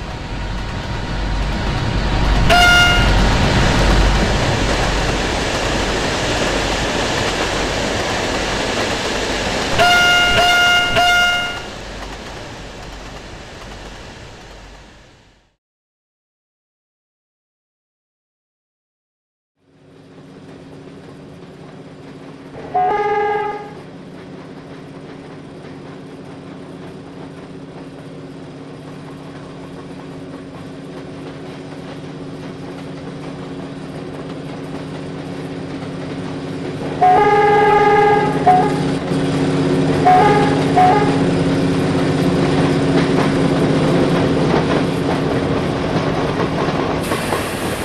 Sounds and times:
Railroad car, train wagon: 0.0s - 15.6s, 19.6s - 47.8s
Train: 0.0s - 15.6s, 19.6s - 47.8s.

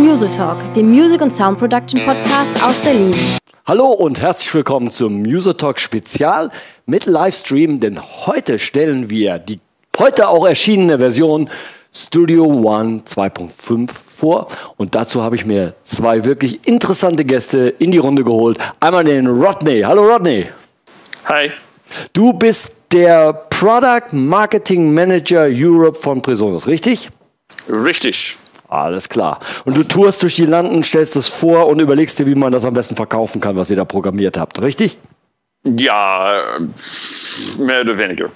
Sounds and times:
Speech: 27.7s - 35.0s, 37.5s - 38.3s.

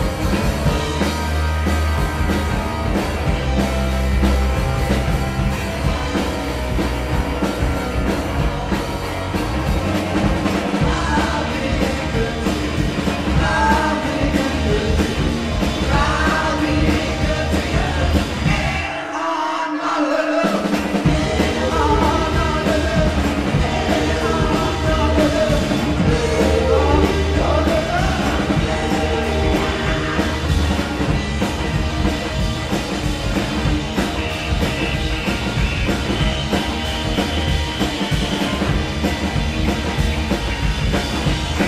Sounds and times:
Rock and roll: 0.0s - 41.6s.

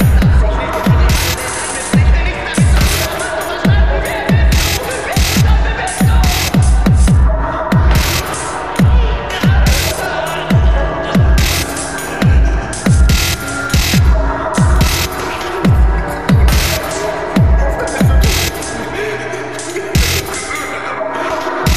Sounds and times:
Dubstep: 0.0s - 21.7s.

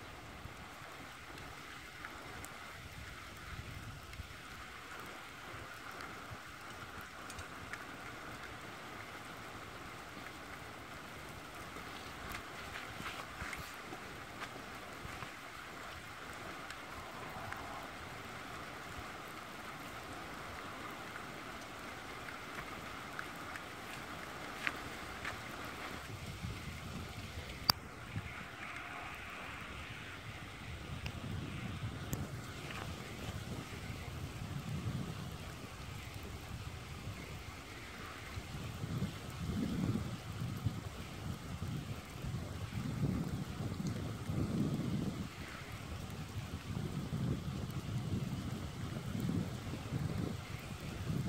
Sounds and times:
Fire: 0.0s - 51.2s.

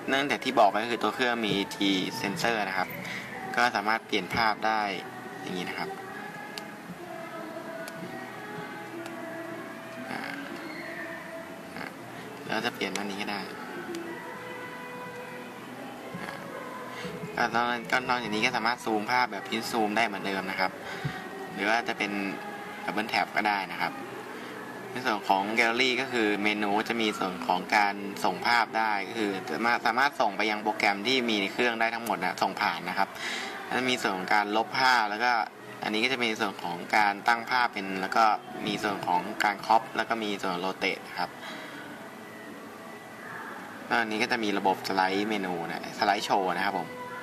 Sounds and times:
Music: 0.0s - 47.2s
Speech: 0.1s - 3.0s, 3.6s - 6.0s, 12.5s - 13.6s, 17.4s - 20.7s, 25.0s - 33.1s, 33.7s - 41.3s.

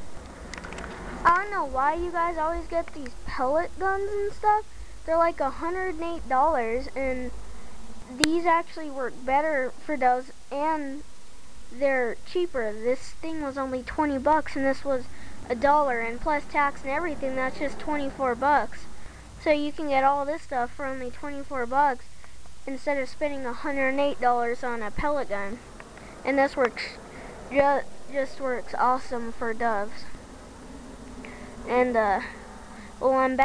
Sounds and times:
Speech: 1.2s - 7.3s, 8.1s - 11.0s, 11.8s - 22.1s, 22.7s - 25.6s, 26.2s - 30.2s, 31.7s - 32.4s, 33.0s - 33.4s.

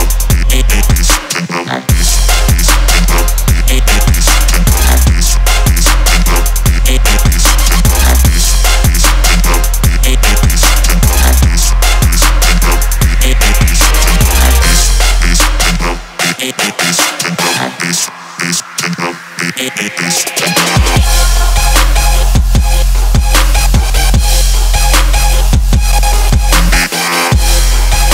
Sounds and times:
Music: 0.0s - 28.1s
Sound effect: 0.8s - 28.1s.

